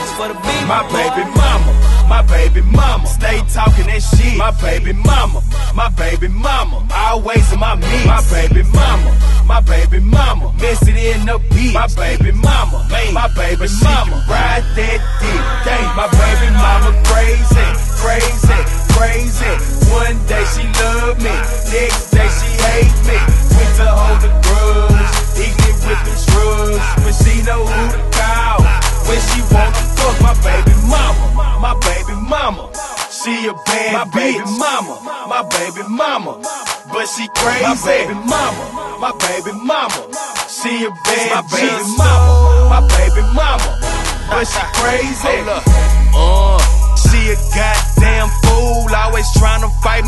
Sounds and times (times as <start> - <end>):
Pop music: 0.0 - 50.0.